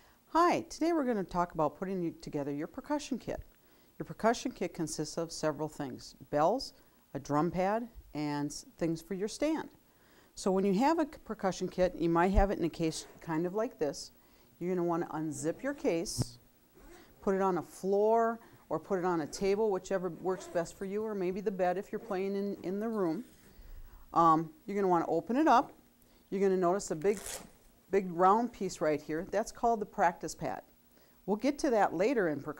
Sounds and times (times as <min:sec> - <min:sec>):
Speech: 0:00.3 - 0:03.4, 0:04.0 - 0:09.8, 0:10.4 - 0:16.4, 0:17.2 - 0:23.3, 0:24.2 - 0:27.2, 0:27.9 - 0:30.7, 0:31.3 - 0:32.5.